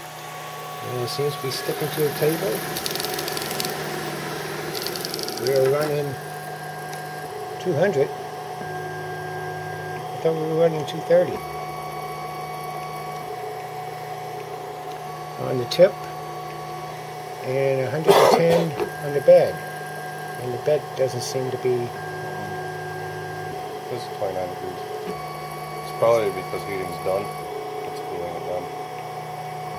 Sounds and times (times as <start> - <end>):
Printer: 0.0 - 29.7
Speech: 0.8 - 2.6, 5.4 - 6.2, 7.6 - 8.1, 10.2 - 11.4, 15.4 - 16.1, 17.4 - 19.6, 20.4 - 22.0, 23.9 - 24.8, 25.9 - 27.3, 27.9 - 28.7.